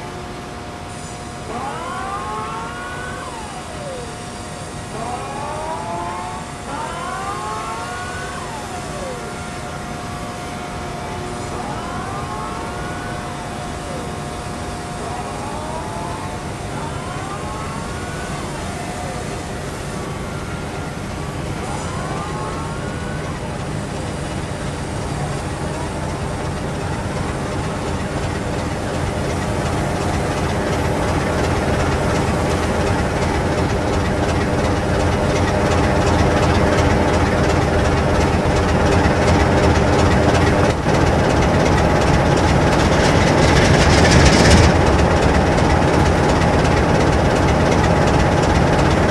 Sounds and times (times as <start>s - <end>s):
Vehicle: 0.0s - 49.1s.